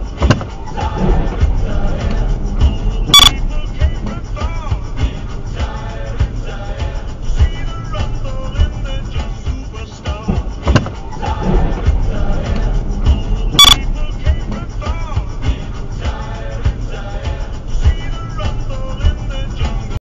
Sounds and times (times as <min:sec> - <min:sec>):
Music: 0:00.0 - 0:20.0.